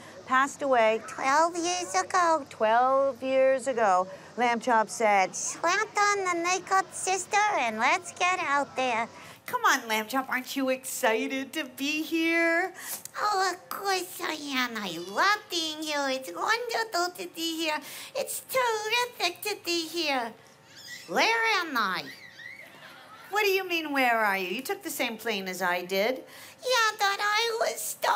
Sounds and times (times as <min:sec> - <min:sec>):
Speech: 0:00.1 - 0:20.4, 0:21.1 - 0:22.2, 0:23.3 - 0:28.1.